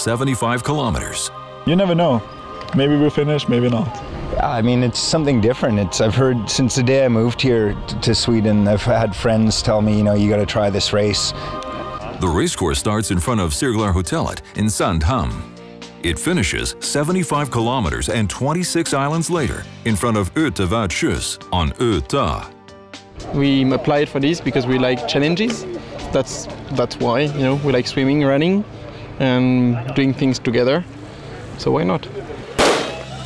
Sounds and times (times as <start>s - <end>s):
Speech: 0.0s - 2.2s, 2.8s - 11.3s, 12.0s - 22.5s, 23.2s - 28.6s, 29.2s - 30.9s, 31.6s - 32.4s
Music: 0.0s - 31.3s, 32.6s - 33.2s
Outside, urban or manmade: 0.0s - 33.2s.